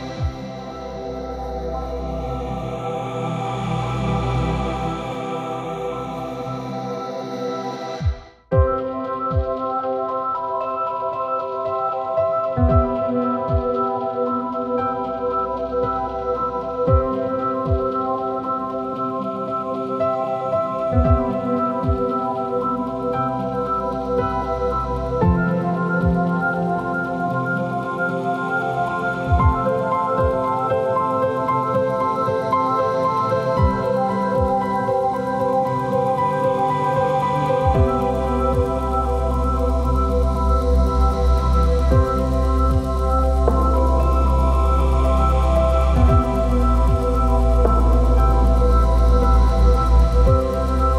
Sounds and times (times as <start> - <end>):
Music: 0.0 - 50.9.